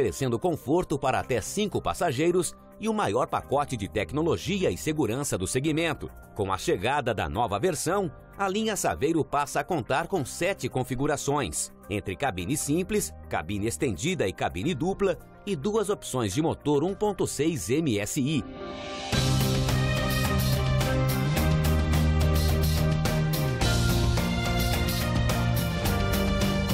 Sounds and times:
Speech: 0.0 - 18.5
Music: 0.0 - 26.7.

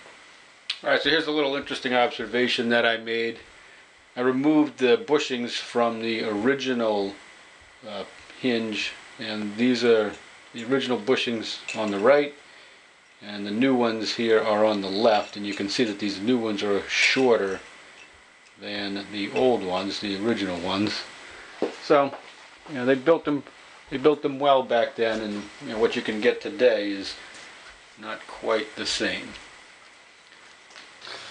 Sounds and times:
Speech: 0.7 - 3.5, 4.2 - 7.2, 7.8 - 12.4, 13.2 - 17.6, 18.6 - 21.1, 21.8 - 27.2, 28.0 - 29.4.

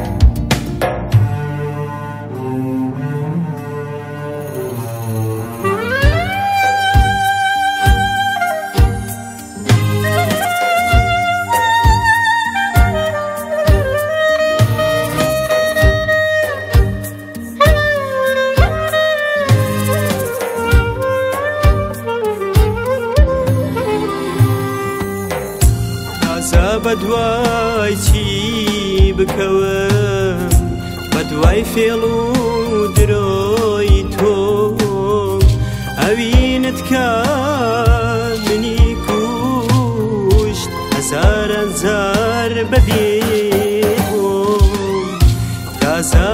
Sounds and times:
Blues: 0.0 - 46.3.

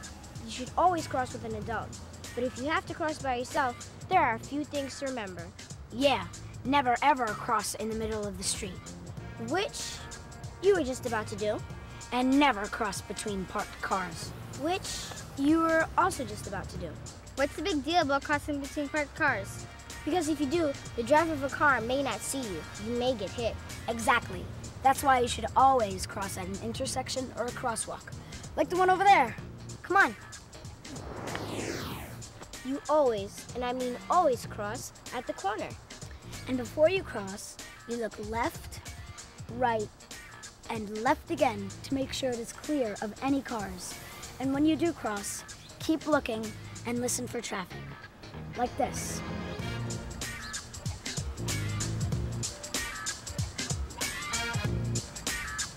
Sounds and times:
Music: 0.0 - 55.7
Speech: 0.4 - 30.2, 32.6 - 35.8, 36.4 - 38.8, 39.5 - 39.9, 40.7 - 47.9, 48.6 - 49.2.

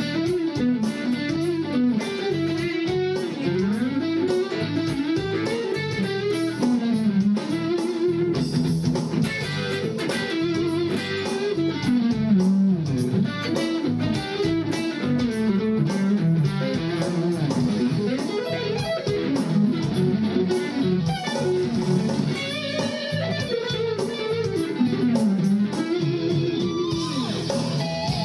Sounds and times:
Bass guitar: 0.0 - 28.2.

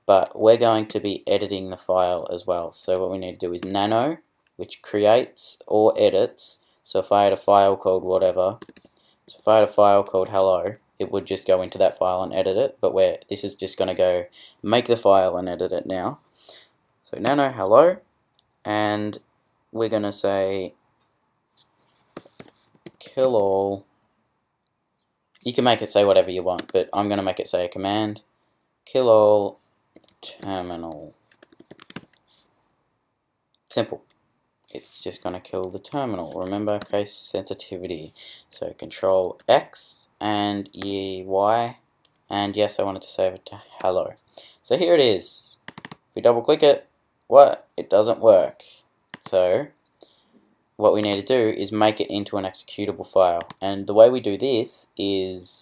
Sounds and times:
Speech: 0.0 - 8.6, 9.3 - 16.2, 17.1 - 19.2, 19.8 - 20.8, 23.0 - 23.9, 25.4 - 28.2, 28.9 - 31.2, 33.7 - 34.1, 34.7 - 45.6, 46.2 - 49.8, 50.8 - 55.6.

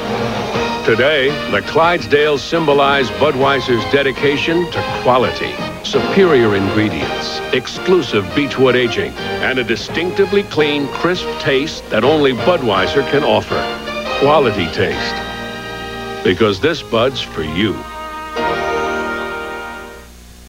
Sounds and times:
Music: 0.0 - 20.4
Speech: 0.9 - 15.2, 16.2 - 17.9.

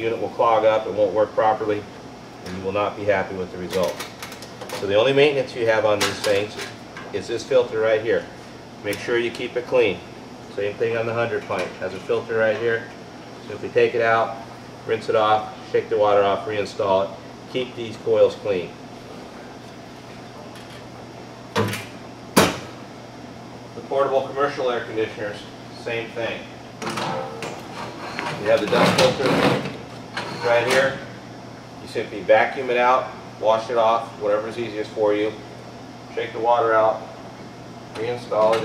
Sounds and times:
Speech: 0.0 - 1.9, 2.5 - 4.0, 4.8 - 18.8, 23.8 - 27.4, 28.3 - 29.6, 30.4 - 31.1, 31.8 - 35.4, 36.1 - 37.1, 38.0 - 38.6.

